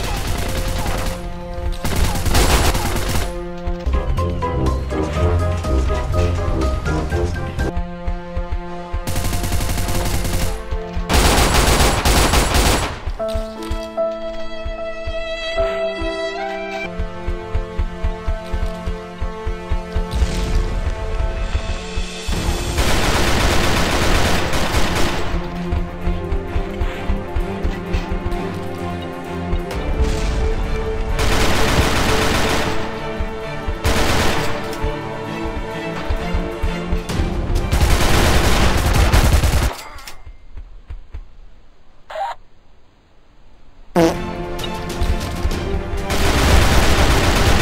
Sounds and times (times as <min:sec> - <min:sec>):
Music: 0:00.0 - 0:39.8, 0:44.0 - 0:47.6.